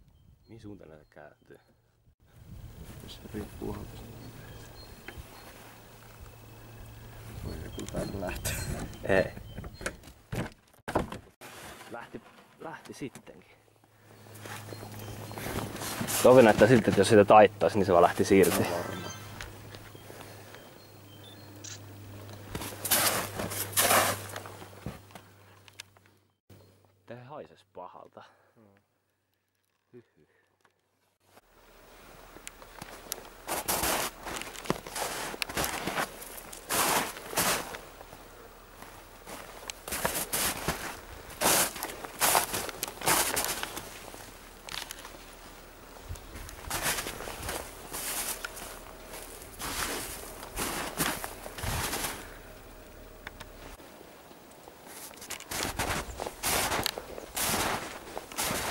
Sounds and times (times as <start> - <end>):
Speech: 0.5 - 1.6, 3.0 - 4.3, 7.8 - 9.4, 11.9 - 13.6, 16.2 - 19.0, 27.1 - 28.8.